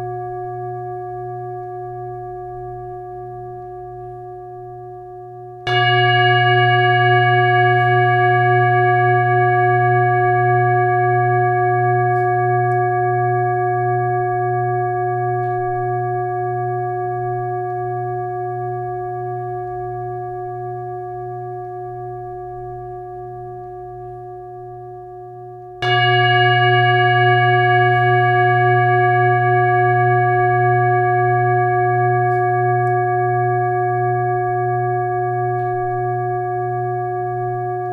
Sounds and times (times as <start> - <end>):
Singing bowl: 0.0 - 37.9.